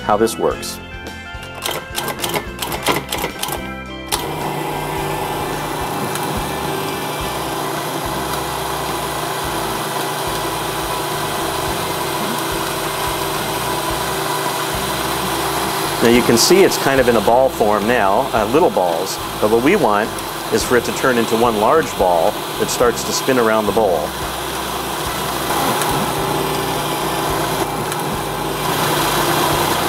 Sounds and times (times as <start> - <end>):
Speech: 0.0 - 0.8, 16.0 - 24.2
Music: 0.0 - 29.8.